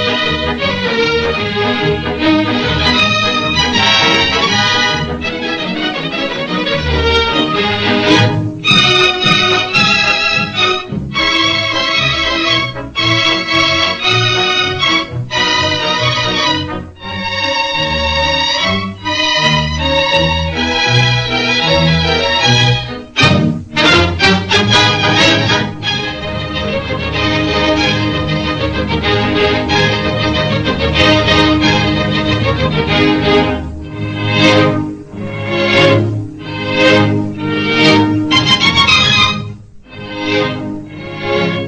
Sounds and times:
Music: 0.0 - 41.6.

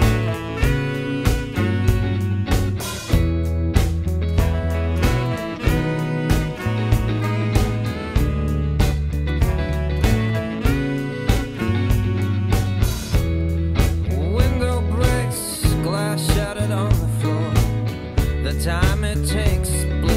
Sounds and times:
Music: 0.0 - 20.1.

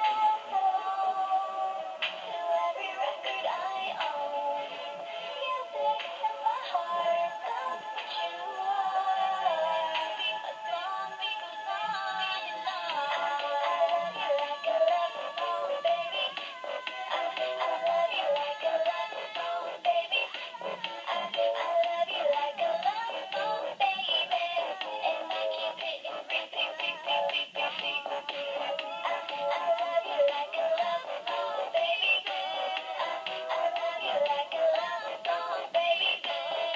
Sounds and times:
Female singing: 0.0 - 36.7
Music: 0.0 - 36.7.

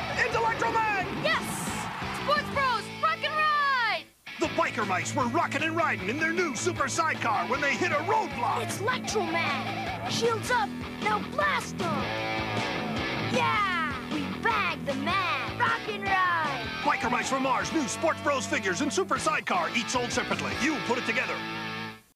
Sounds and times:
Music: 0.0 - 22.1.

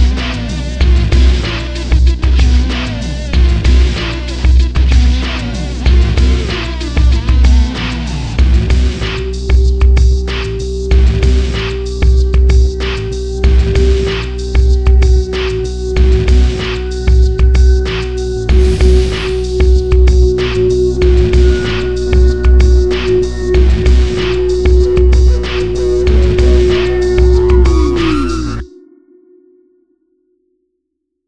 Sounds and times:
Music: 0.0 - 30.8.

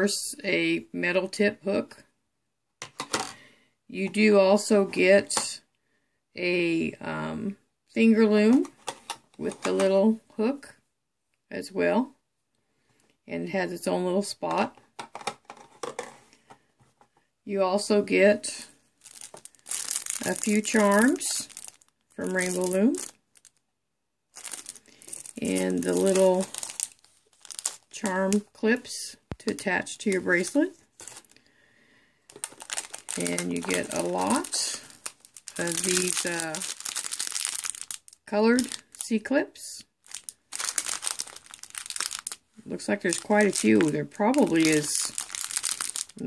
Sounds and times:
Speech: 0.0 - 2.1, 3.9 - 5.7, 6.4 - 8.7, 9.4 - 10.8, 11.5 - 12.2, 13.3 - 14.8, 17.5 - 18.8, 20.2 - 21.5, 22.2 - 23.1, 25.4 - 26.5, 27.9 - 30.8, 33.2 - 34.9, 35.6 - 36.7, 38.3 - 39.9, 42.6 - 45.2
Inside, small room: 0.0 - 46.2
Crumpling, crinkling: 18.5 - 23.6, 24.3 - 28.5, 29.3 - 31.5, 32.3 - 39.1, 40.0 - 46.2.

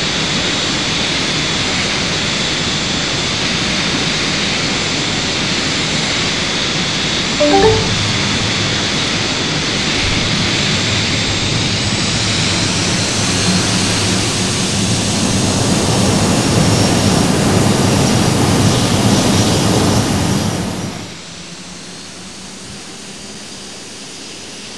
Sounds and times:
Aircraft: 13.0 - 24.7.

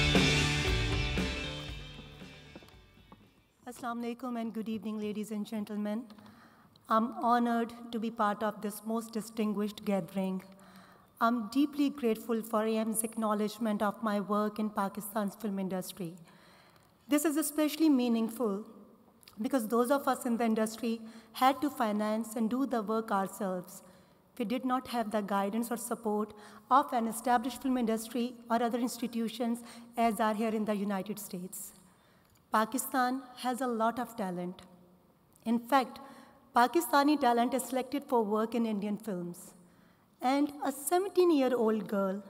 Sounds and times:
Narration, monologue: 2.6 - 42.2
Female speech, woman speaking: 3.7 - 6.1, 6.9 - 10.5, 11.2 - 16.2, 17.1 - 18.6, 19.4 - 23.8, 24.4 - 31.7, 32.6 - 34.6, 35.4 - 35.9, 36.6 - 39.5, 40.2 - 42.2.

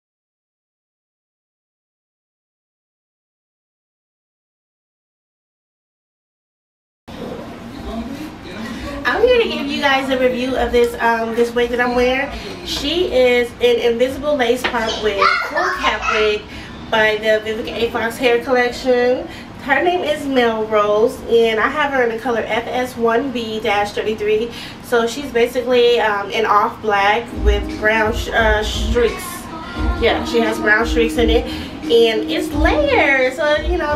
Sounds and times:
Speech: 7.2 - 33.9.

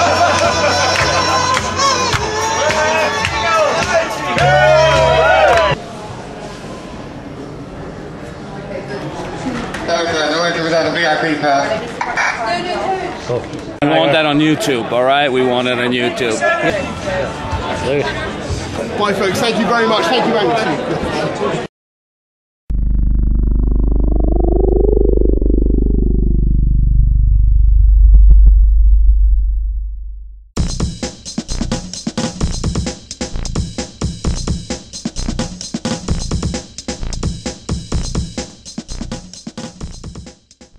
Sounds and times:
Music: 0.0 - 5.8, 16.7 - 18.8, 30.6 - 40.7
Speech: 12.5 - 21.7.

